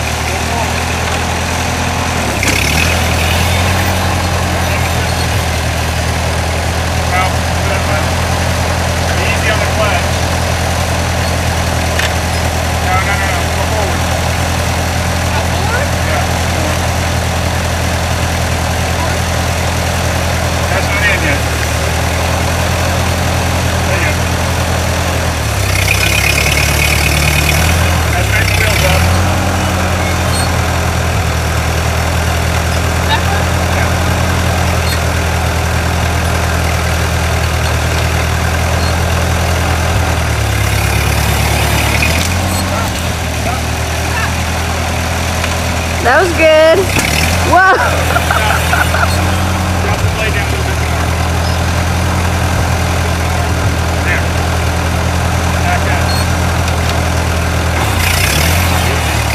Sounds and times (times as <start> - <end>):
Outside, rural or natural: 0.0 - 59.3
Vehicle: 0.0 - 59.3
Speech: 0.2 - 1.3, 7.1 - 8.2, 28.1 - 29.1, 46.0 - 46.9, 49.9 - 51.2, 54.0 - 54.4, 55.6 - 56.2.